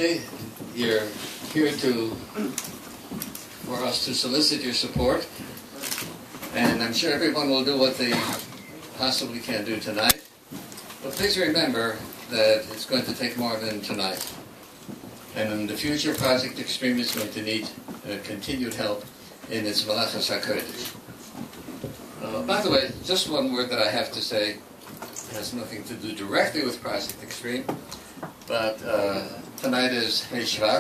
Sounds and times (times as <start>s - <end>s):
Male speech, man speaking: 0.0s - 2.6s, 3.7s - 5.4s, 6.5s - 10.2s, 11.0s - 14.4s, 15.3s - 21.0s, 22.2s - 24.6s, 25.2s - 27.8s, 28.5s - 30.8s.